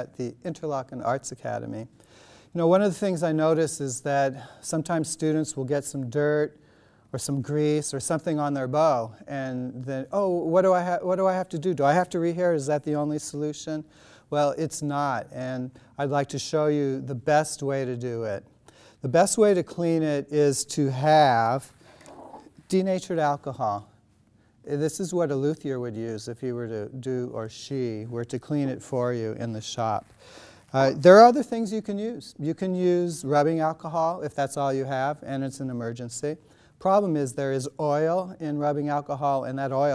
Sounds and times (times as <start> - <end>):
Speech: 0.0 - 1.9, 2.6 - 24.0, 24.6 - 30.1, 30.7 - 39.9.